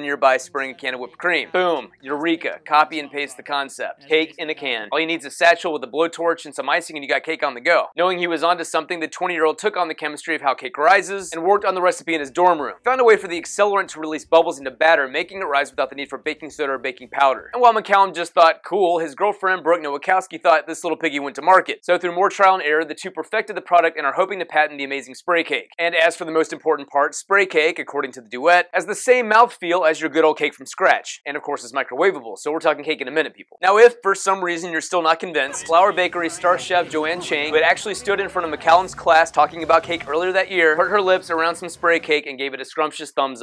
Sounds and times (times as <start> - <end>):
Speech: 0.0 - 43.4.